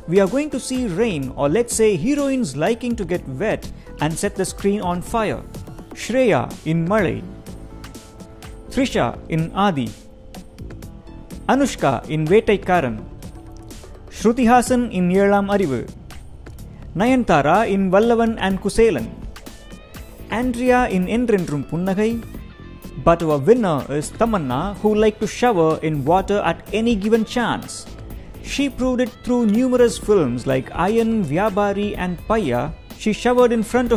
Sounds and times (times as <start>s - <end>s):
Music: 0.0s - 33.9s
Speech: 0.1s - 7.3s, 8.7s - 10.0s, 11.5s - 13.0s, 14.1s - 15.9s, 17.0s - 19.2s, 20.3s - 22.3s, 23.0s - 27.9s, 28.5s - 33.9s.